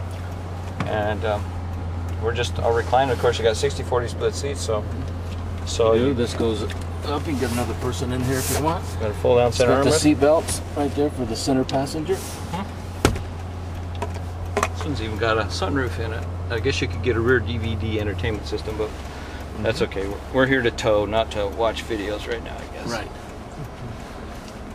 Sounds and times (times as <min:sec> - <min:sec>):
Speech: 0:00.8 - 0:01.4, 0:02.2 - 0:05.0, 0:05.7 - 0:12.2, 0:14.8 - 0:18.9, 0:19.6 - 0:23.2.